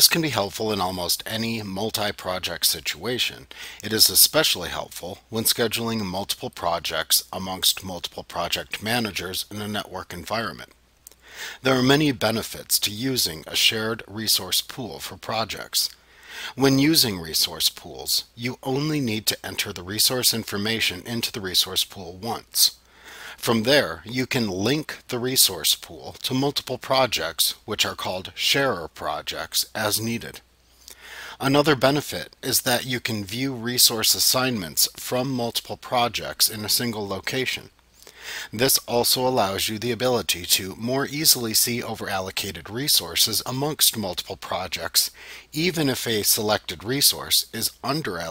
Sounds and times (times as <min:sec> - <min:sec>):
Speech: 0:00.0 - 0:10.8, 0:11.6 - 0:22.8, 0:23.4 - 0:30.4, 0:31.4 - 0:37.7, 0:38.5 - 0:48.3.